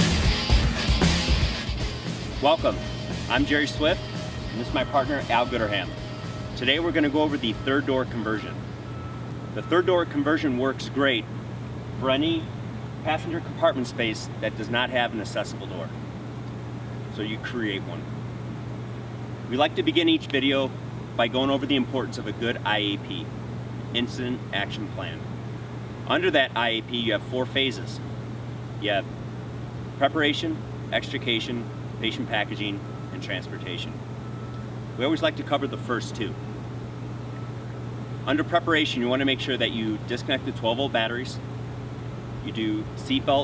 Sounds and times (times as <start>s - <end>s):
Speech: 2.4s - 4.0s, 4.6s - 5.9s, 6.6s - 8.6s, 9.6s - 11.3s, 12.0s - 16.0s, 17.2s - 18.1s, 19.5s - 23.3s, 24.0s - 25.2s, 26.1s - 28.0s, 28.8s - 29.1s, 30.0s - 34.0s, 35.0s - 36.4s, 38.3s - 41.4s, 42.4s - 43.4s.